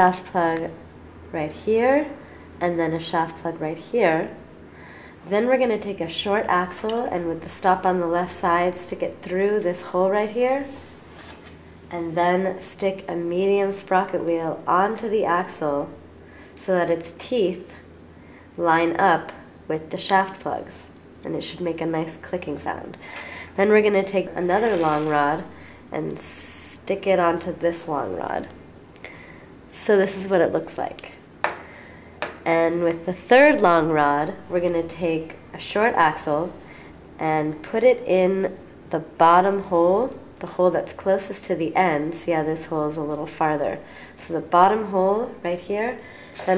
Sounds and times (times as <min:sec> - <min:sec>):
Speech: 0:00.0 - 0:04.4, 0:05.3 - 0:10.8, 0:11.9 - 0:16.0, 0:16.6 - 0:17.8, 0:18.6 - 0:23.0, 0:23.6 - 0:28.6, 0:29.7 - 0:31.2, 0:32.4 - 0:36.6, 0:37.2 - 0:46.5.